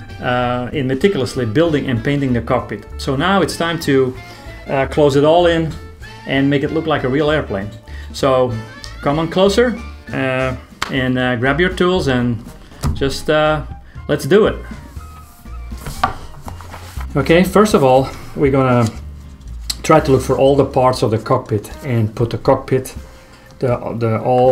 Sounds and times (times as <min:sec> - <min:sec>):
Music: 0:00.0 - 0:24.5
Speech: 0:00.2 - 0:12.4, 0:13.0 - 0:14.7, 0:17.1 - 0:19.0, 0:19.7 - 0:23.0, 0:23.6 - 0:24.5.